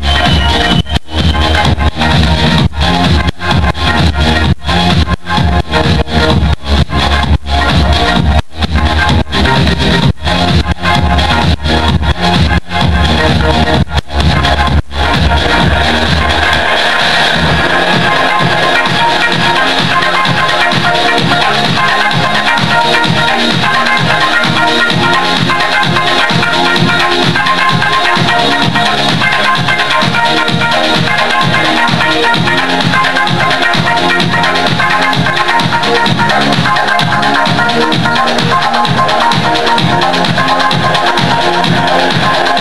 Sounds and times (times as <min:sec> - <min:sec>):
Dance music: 0:00.0 - 0:42.6
Pop music: 0:00.0 - 0:42.6.